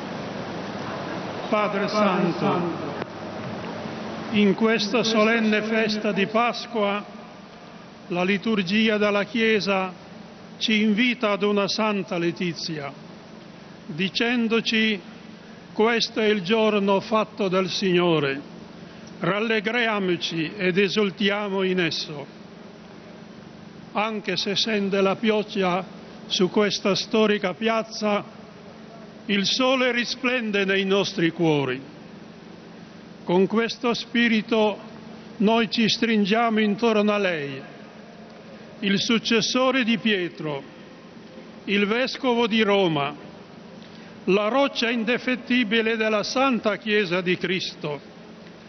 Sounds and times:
Male speech, man speaking: 0:01.4 - 0:03.0, 0:04.3 - 0:07.1, 0:08.1 - 0:10.0, 0:10.6 - 0:13.0, 0:13.9 - 0:15.0, 0:15.8 - 0:18.4, 0:19.2 - 0:22.3, 0:24.0 - 0:28.3, 0:29.3 - 0:31.9, 0:33.3 - 0:34.8, 0:35.4 - 0:37.8, 0:38.8 - 0:40.7, 0:41.7 - 0:43.2, 0:44.3 - 0:48.0.

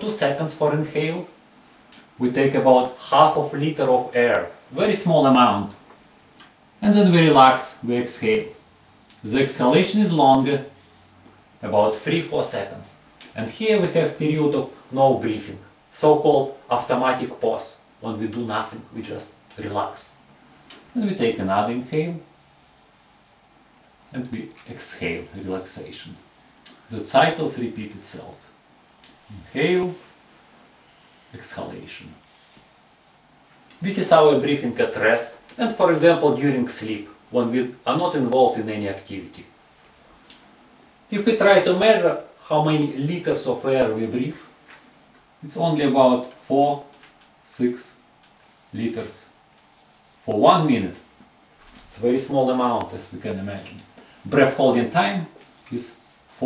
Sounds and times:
Speech: 0:00.0 - 0:01.4, 0:02.2 - 0:05.8, 0:06.8 - 0:08.6, 0:09.2 - 0:10.8, 0:11.6 - 0:20.2, 0:20.9 - 0:22.3, 0:24.1 - 0:26.3, 0:26.9 - 0:28.5, 0:29.3 - 0:30.1, 0:31.3 - 0:32.2, 0:33.8 - 0:39.6, 0:41.1 - 0:44.5, 0:45.4 - 0:48.0, 0:48.7 - 0:49.4, 0:50.3 - 0:51.1, 0:51.8 - 0:56.4.

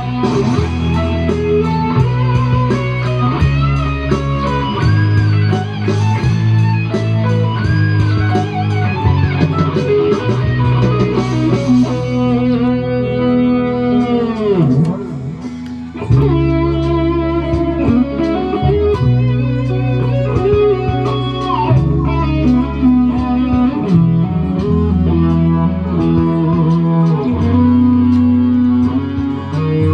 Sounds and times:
Electric guitar: 0:00.0 - 0:29.9.

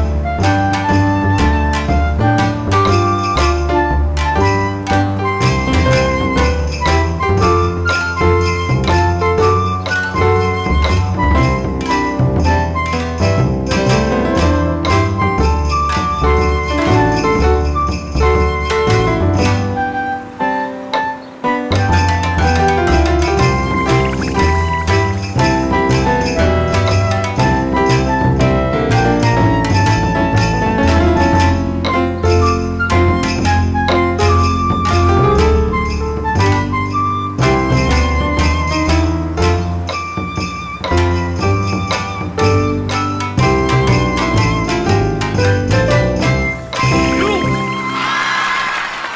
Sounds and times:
Jingle bell: 0:05.4 - 0:19.7, 0:21.8 - 0:28.3, 0:28.9 - 0:36.1, 0:37.4 - 0:48.3.

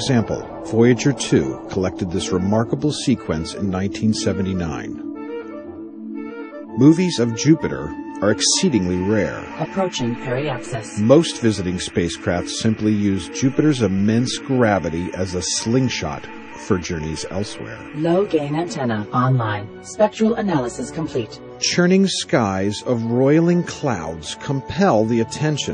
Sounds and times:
Speech: 0:00.0 - 0:05.0, 0:06.8 - 0:25.7
Clarinet: 0:00.0 - 0:05.7, 0:06.4 - 0:20.0, 0:20.6 - 0:25.7.

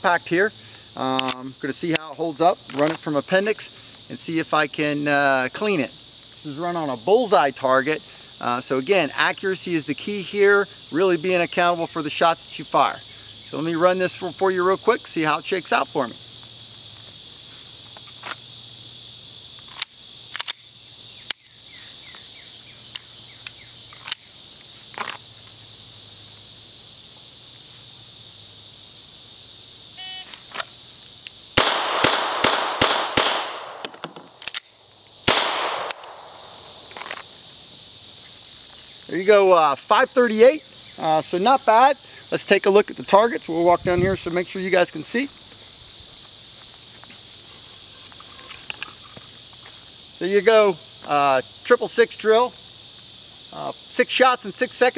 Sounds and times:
Speech: 0:00.0 - 0:05.9, 0:06.5 - 0:16.2, 0:39.1 - 0:45.4, 0:50.2 - 0:52.6, 0:53.5 - 0:54.9
Outside, rural or natural: 0:00.0 - 0:54.9.

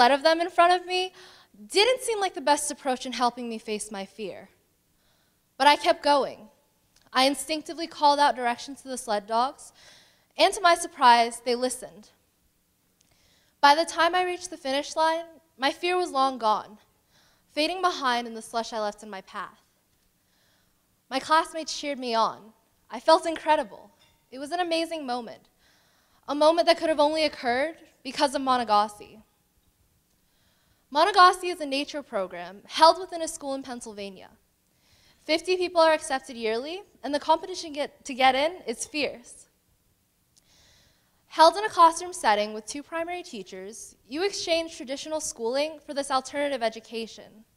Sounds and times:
Female speech, woman speaking: 0:00.0 - 0:01.1, 0:01.7 - 0:04.5, 0:05.6 - 0:06.5, 0:07.2 - 0:09.7, 0:10.4 - 0:12.1, 0:13.6 - 0:16.8, 0:17.6 - 0:19.6, 0:21.1 - 0:25.4, 0:26.3 - 0:29.2, 0:31.0 - 0:34.4, 0:35.3 - 0:39.5, 0:41.4 - 0:47.4
Narration, monologue: 0:00.0 - 0:47.5.

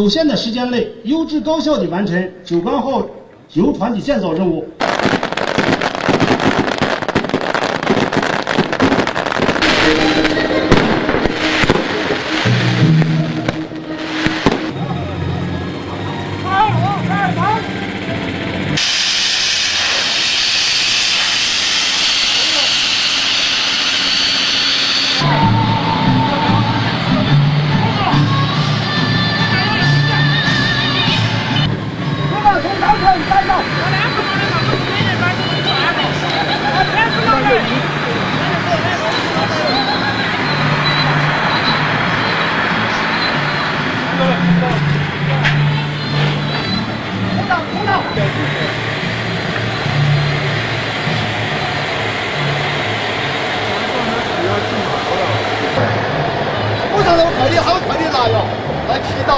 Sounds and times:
Music: 0:07.9 - 0:18.8, 0:25.2 - 0:59.3.

